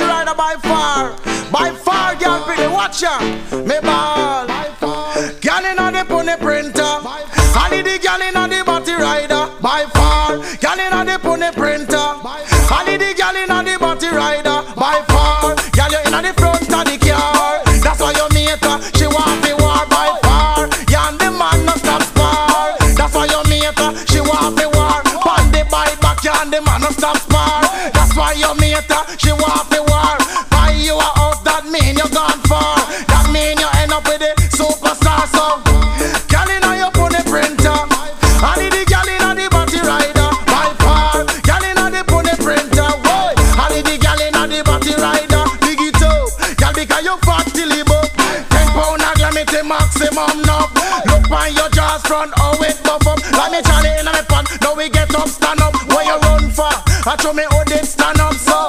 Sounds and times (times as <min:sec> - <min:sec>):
Music: 0:00.0 - 0:58.6.